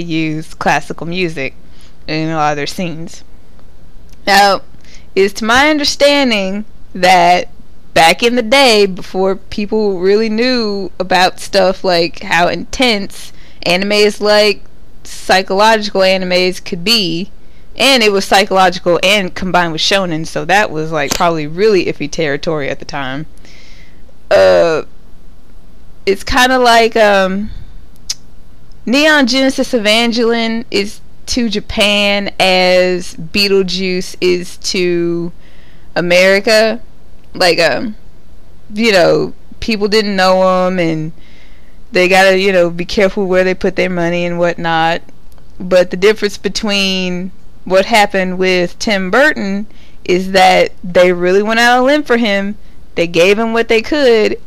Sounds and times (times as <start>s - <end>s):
Speech: 0.0s - 3.2s, 4.2s - 23.3s, 24.3s - 24.9s, 26.1s - 27.6s, 28.9s - 35.3s, 36.0s - 36.8s, 37.4s - 38.0s, 38.7s - 41.1s, 41.9s - 45.0s, 45.6s - 54.4s.